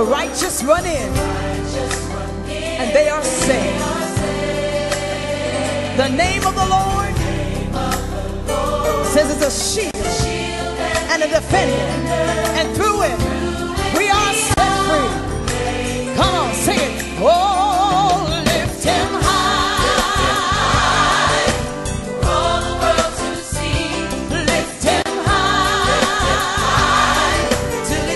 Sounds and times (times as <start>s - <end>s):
Gospel music: 0.0s - 28.1s.